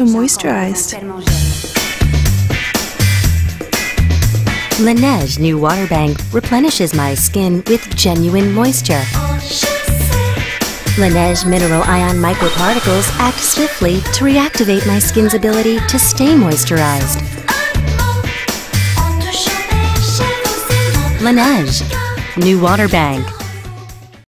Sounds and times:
Speech: 0.0s - 1.4s, 4.8s - 9.2s, 11.0s - 17.2s, 21.2s - 23.4s
Music: 0.0s - 24.3s.

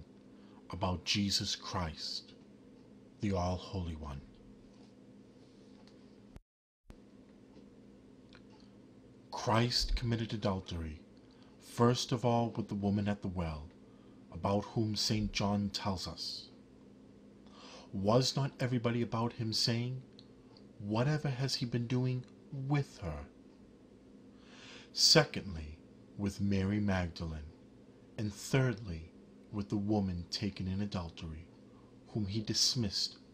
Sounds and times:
Speech: 0.7s - 2.4s, 3.2s - 4.4s, 9.3s - 16.6s, 17.9s - 20.1s, 20.8s - 23.4s, 24.9s - 27.6s, 28.2s - 33.3s.

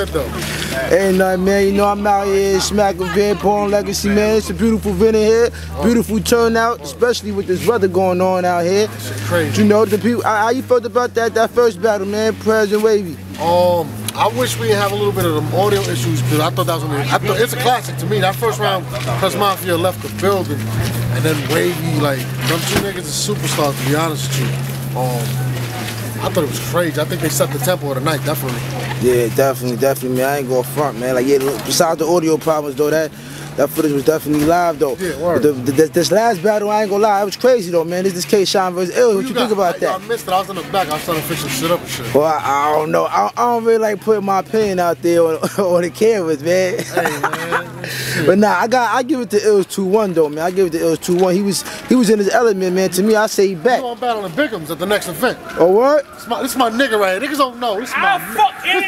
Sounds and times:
Speech: 0.0s - 25.5s.

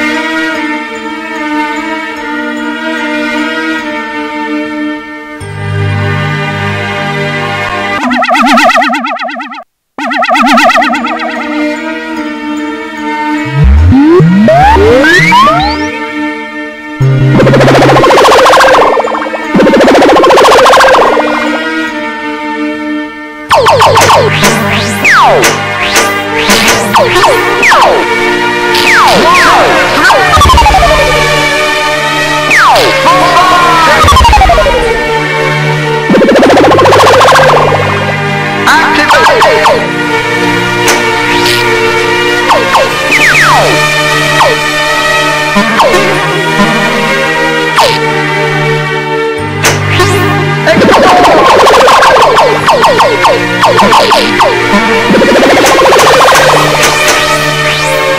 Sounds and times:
Music: 0.0s - 58.1s.

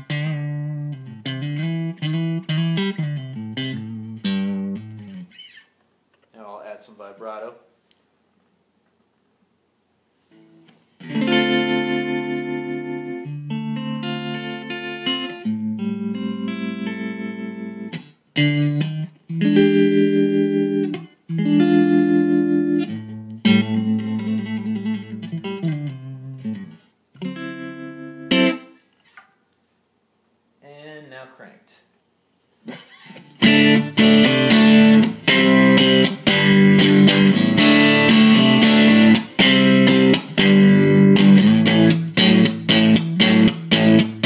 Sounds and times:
Effects unit: 0.0s - 6.3s, 10.2s - 29.5s, 32.6s - 44.2s
Guitar: 0.0s - 8.0s, 10.2s - 29.6s, 32.6s - 44.2s
Inside, small room: 0.0s - 44.2s.

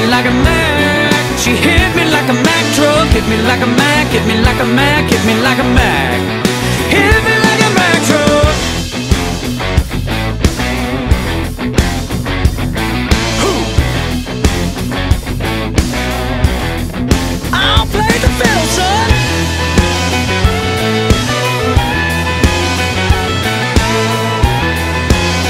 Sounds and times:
Grunge: 0.0s - 25.4s.

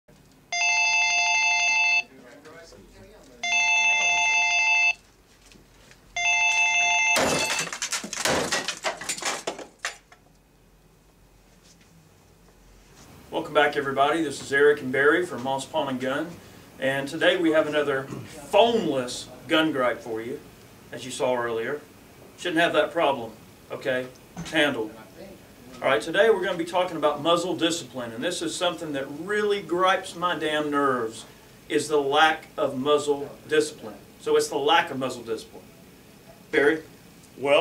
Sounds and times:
Speech: 2.0s - 4.2s, 13.3s - 35.7s, 36.5s - 37.6s.

